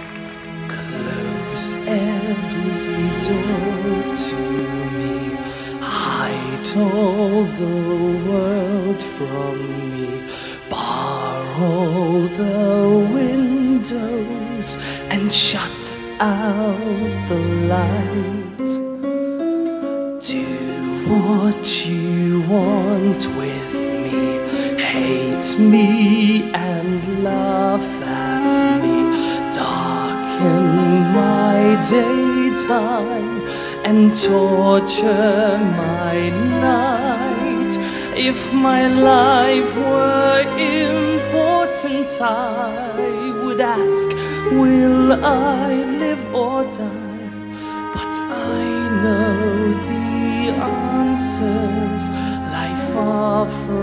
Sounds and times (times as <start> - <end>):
Music: 0.0 - 53.8
Male singing: 0.6 - 18.9, 20.2 - 53.8.